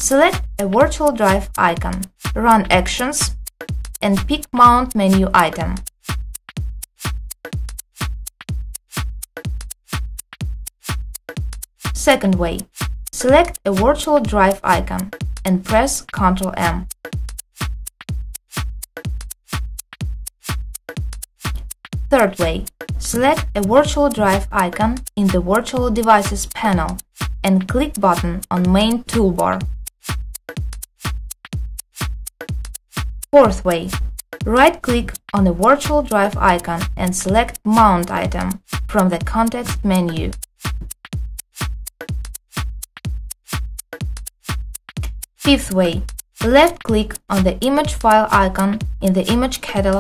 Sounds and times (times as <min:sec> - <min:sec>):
Speech: 0:00.0 - 0:03.3, 0:04.0 - 0:05.8, 0:12.0 - 0:16.9, 0:22.1 - 0:29.6, 0:33.4 - 0:40.4, 0:45.5 - 0:50.0
Music: 0:00.0 - 0:50.0.